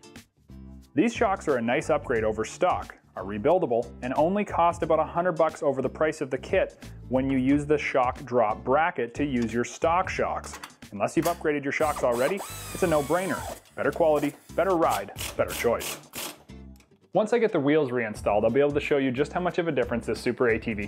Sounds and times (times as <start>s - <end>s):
Speech: 1.0s - 15.9s, 17.2s - 20.8s.